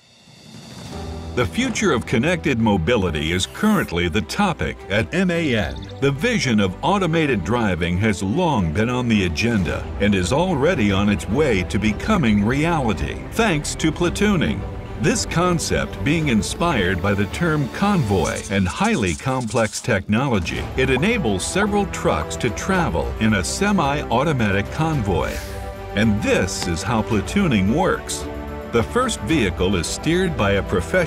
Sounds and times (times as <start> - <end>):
Music: 0.0 - 31.0
Speech: 1.4 - 31.0.